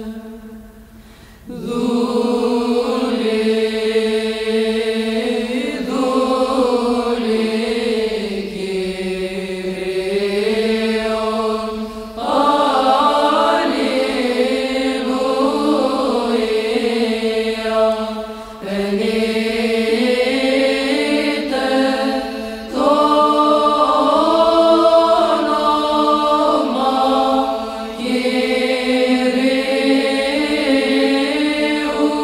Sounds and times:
Mantra: 0:00.0 - 0:00.8, 0:01.5 - 0:32.2.

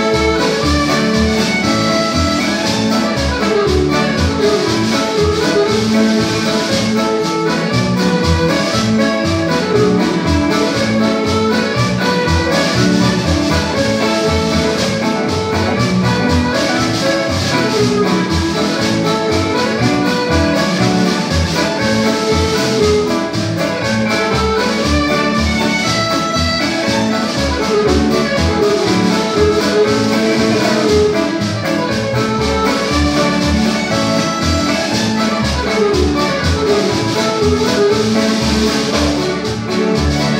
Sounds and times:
Music: 0:00.0 - 0:40.3.

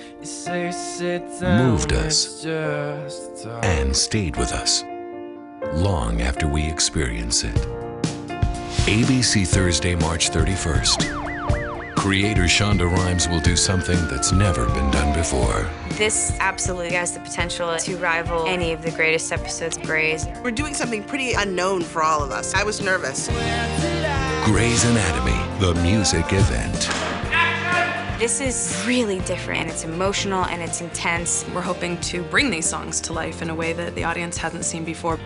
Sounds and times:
Tender music: 0:00.0 - 0:35.2
Speech: 0:01.4 - 0:04.9, 0:05.7 - 0:07.7, 0:08.9 - 0:11.0, 0:12.0 - 0:23.2, 0:24.5 - 0:35.2.

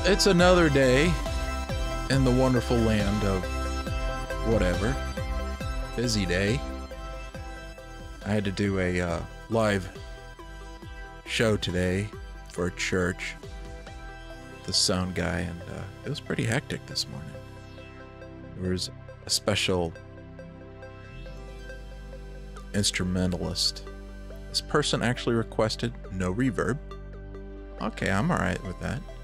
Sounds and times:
Speech: 0:00.0 - 0:01.2, 0:02.1 - 0:03.4, 0:04.4 - 0:05.0, 0:06.0 - 0:06.6, 0:08.2 - 0:09.9, 0:11.3 - 0:13.4, 0:14.7 - 0:17.4, 0:18.6 - 0:20.0, 0:22.7 - 0:23.8, 0:24.6 - 0:26.8, 0:27.8 - 0:29.0
Music: 0:00.0 - 0:29.2.

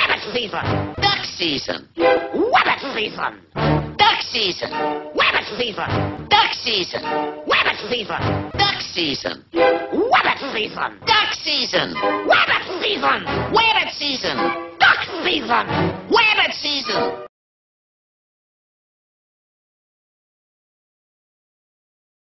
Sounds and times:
Speech: 0:00.0 - 0:17.2.

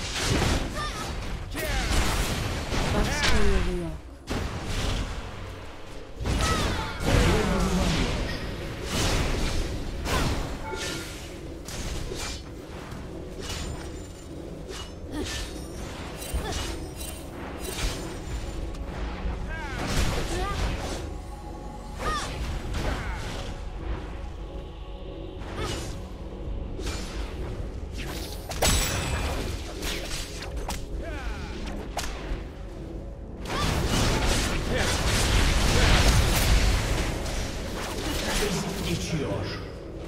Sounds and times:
Music: 0:00.0 - 0:40.0.

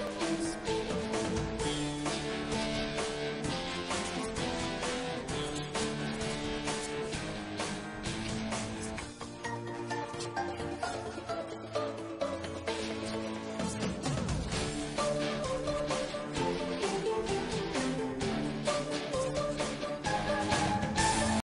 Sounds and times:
Music: 0:00.0 - 0:21.4.

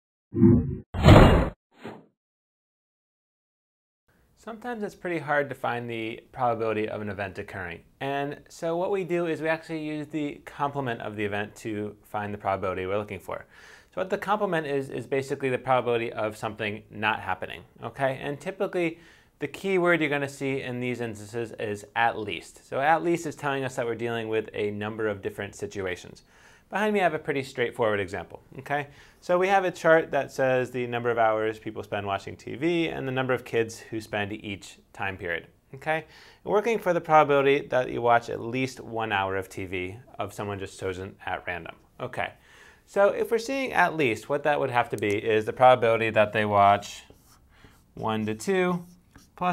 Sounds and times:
Speech: 0:04.4 - 0:47.2, 0:48.0 - 0:49.5.

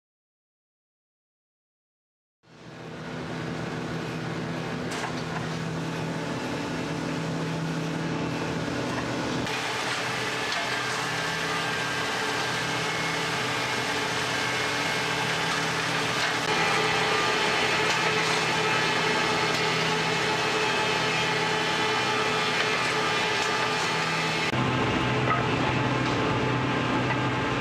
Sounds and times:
Printer: 0:04.8 - 0:27.6.

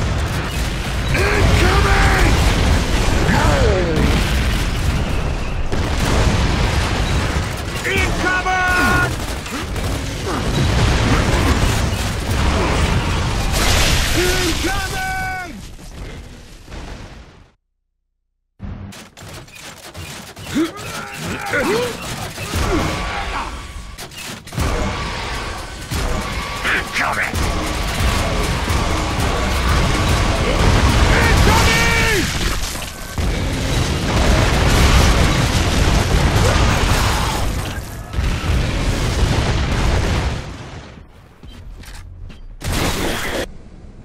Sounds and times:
Speech: 0:01.2 - 0:02.4, 0:03.3 - 0:04.2, 0:07.8 - 0:09.1, 0:14.1 - 0:15.6, 0:26.6 - 0:27.4.

